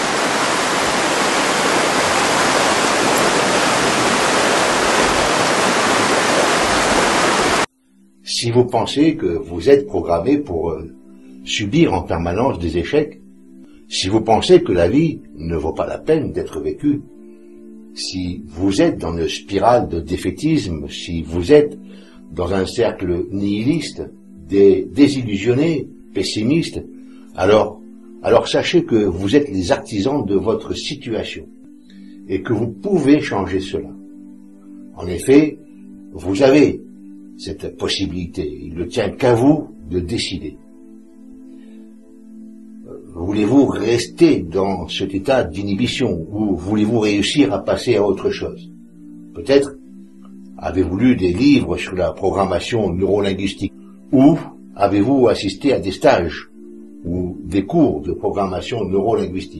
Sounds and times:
Music: 0.0s - 59.5s
Speech: 8.2s - 10.9s, 11.5s - 13.2s, 13.9s - 17.1s, 18.0s - 31.5s, 32.3s - 34.0s, 35.0s - 35.6s, 36.2s - 36.8s, 37.4s - 40.6s, 42.9s - 48.6s, 49.4s - 49.8s, 50.6s - 59.5s.

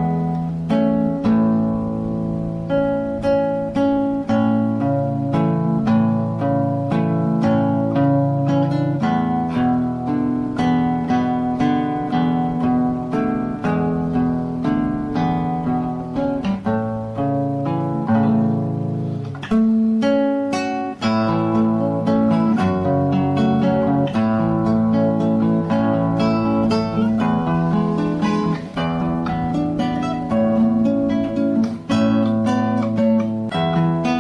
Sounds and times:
Acoustic guitar: 0.0s - 34.2s.

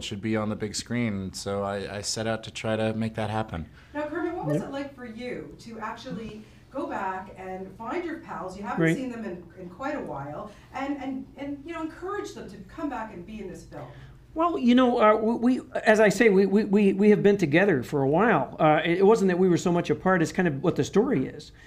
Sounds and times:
Speech: 0.0s - 4.9s, 7.9s - 9.2s.

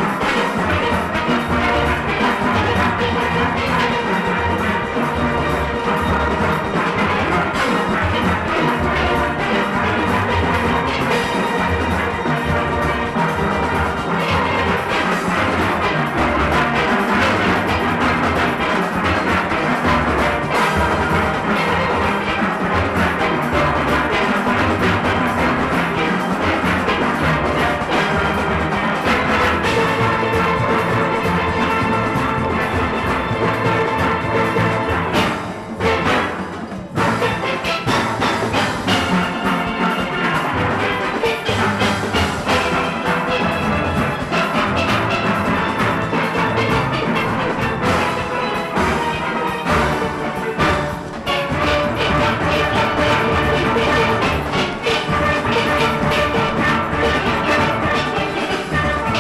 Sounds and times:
Steelpan: 0.0s - 59.2s.

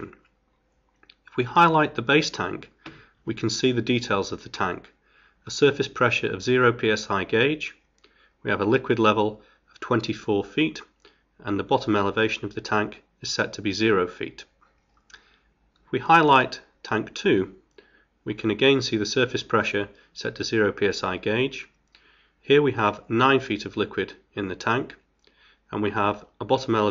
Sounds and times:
Speech: 0.0s - 0.2s, 1.3s - 2.7s, 3.3s - 7.8s, 8.4s - 14.5s, 15.9s - 17.6s, 18.3s - 21.8s, 22.4s - 25.0s, 25.7s - 26.9s.

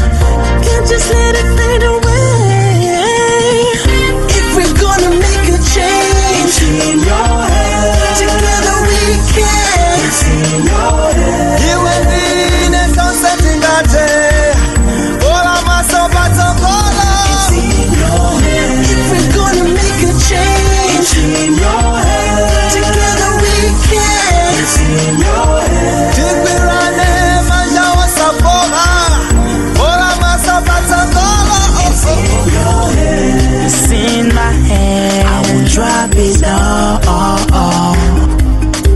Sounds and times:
Music: 0.0s - 38.9s
Singing: 0.6s - 38.2s.

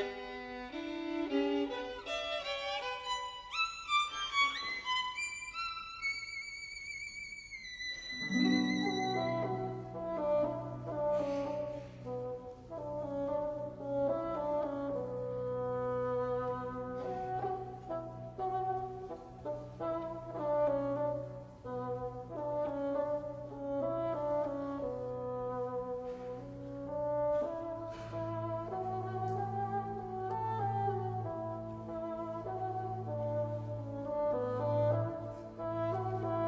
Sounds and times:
Wind instrument, woodwind instrument: 0.0s - 36.4s.

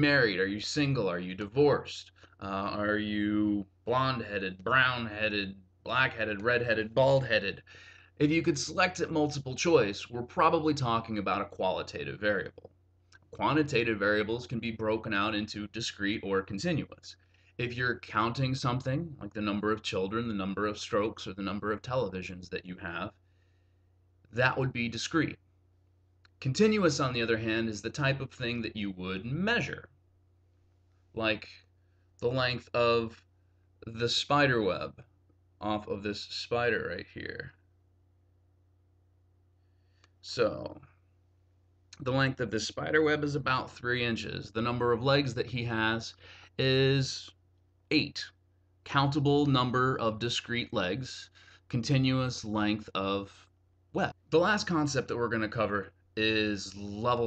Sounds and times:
Speech: 0.0s - 12.7s, 13.4s - 23.2s, 24.3s - 25.4s, 26.4s - 29.9s, 31.1s - 33.2s, 33.8s - 37.6s, 40.2s - 40.9s, 42.0s - 57.2s
Inside, small room: 0.0s - 57.2s.

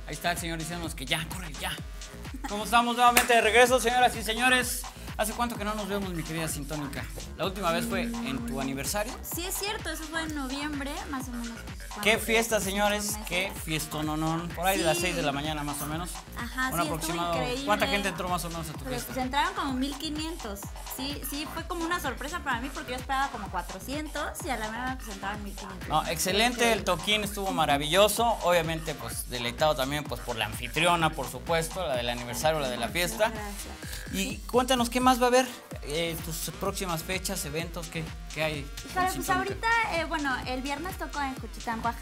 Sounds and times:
Speech: 2.4s - 42.0s
Dubstep: 3.8s - 34.8s, 35.7s - 42.0s.

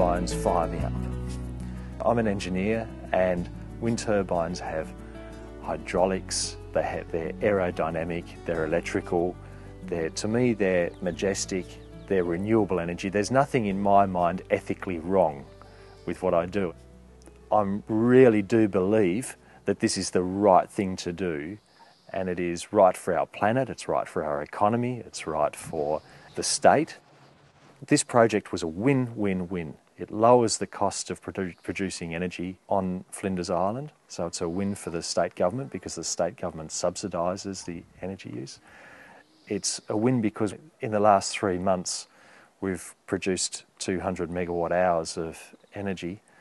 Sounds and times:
Speech: 0.0s - 1.0s, 2.0s - 4.9s, 5.6s - 15.5s, 16.1s - 16.8s, 17.5s - 27.0s, 27.8s - 38.6s, 39.5s - 46.2s
Music: 0.0s - 21.6s.

